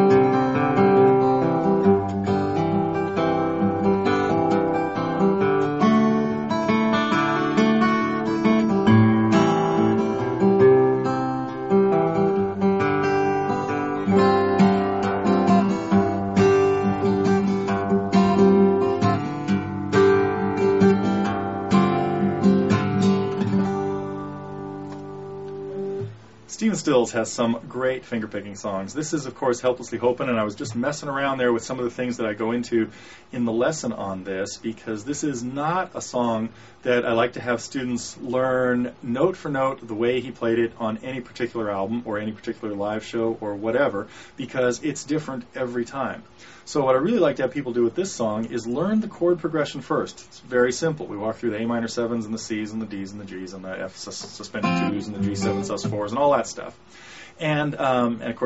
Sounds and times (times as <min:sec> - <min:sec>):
Guitar: 0:00.0 - 0:58.4.